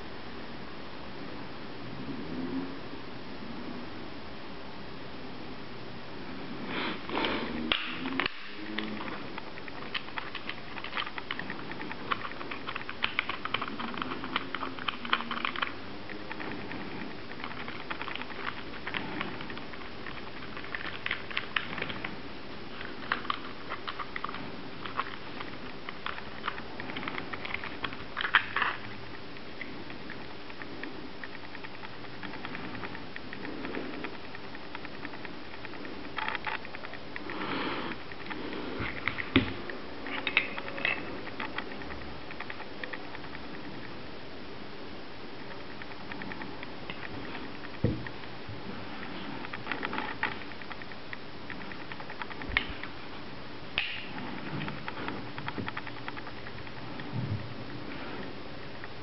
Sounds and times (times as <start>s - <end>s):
Inside, small room: 0.0s - 59.0s.